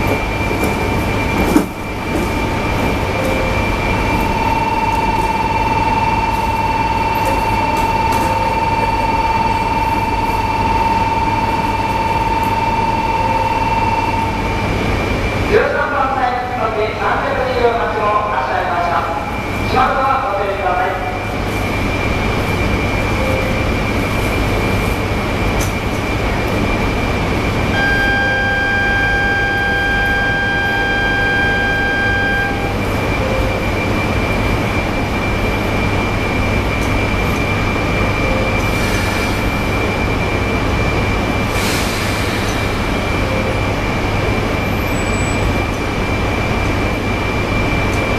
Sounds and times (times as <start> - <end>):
Train: 0.0 - 48.1
Speech: 15.5 - 21.3
Outside, urban or manmade: 20.4 - 48.1.